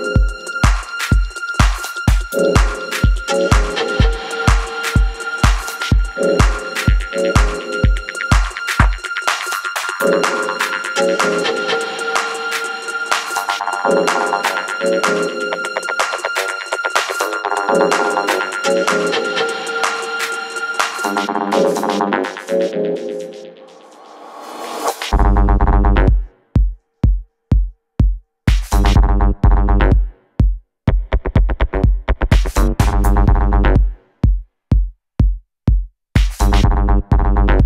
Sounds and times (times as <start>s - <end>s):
Music: 0.0s - 37.6s.